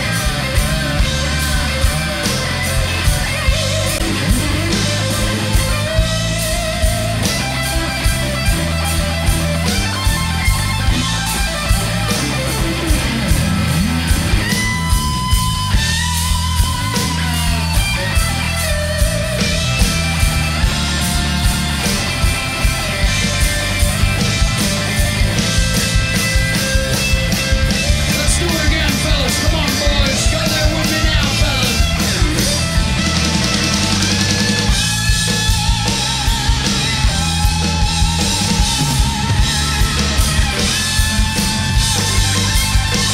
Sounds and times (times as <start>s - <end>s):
Guitar: 0.0s - 43.1s
Rock and roll: 0.0s - 43.1s
Speech: 28.0s - 32.4s.